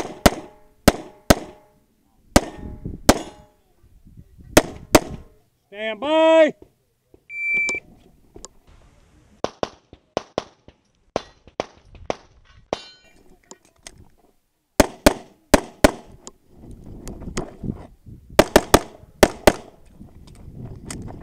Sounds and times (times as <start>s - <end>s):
Speech: 5.4s - 7.2s.